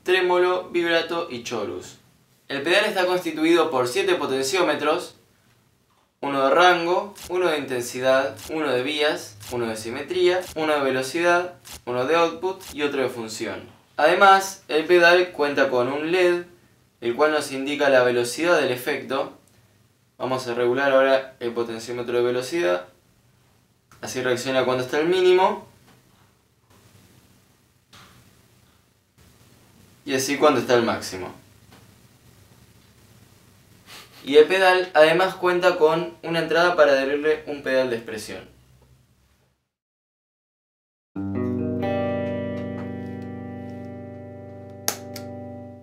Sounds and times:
Speech: 0.0 - 5.2, 6.2 - 19.4, 20.2 - 23.0, 24.0 - 25.7, 30.0 - 31.5, 34.2 - 38.6.

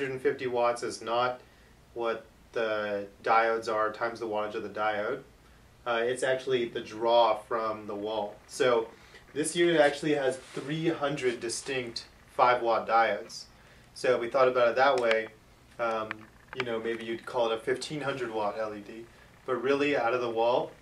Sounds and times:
Speech: 0.0 - 20.8.

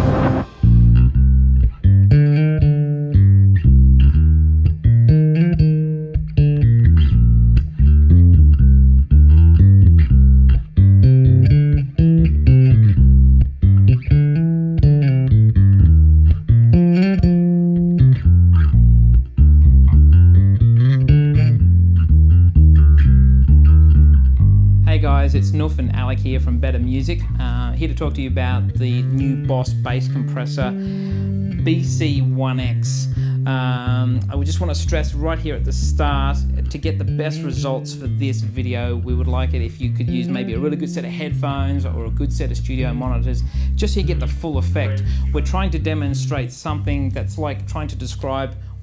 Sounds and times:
Music: 0.0 - 48.8
Speech: 24.9 - 30.8, 31.5 - 48.6.

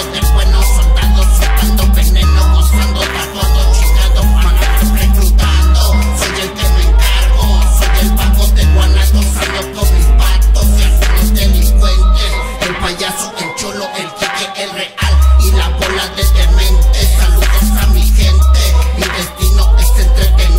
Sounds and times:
Ska: 0.0 - 20.5.

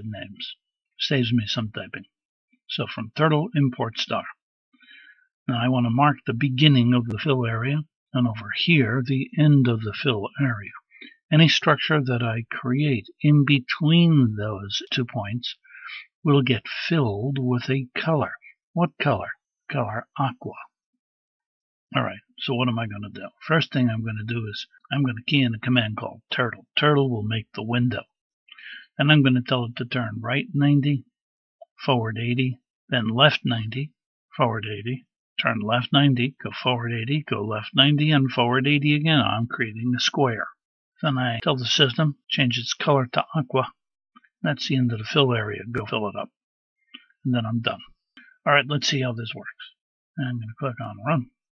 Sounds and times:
Speech: 0.0 - 4.4, 5.5 - 20.8, 21.9 - 43.8, 44.4 - 46.4, 47.0 - 51.4.

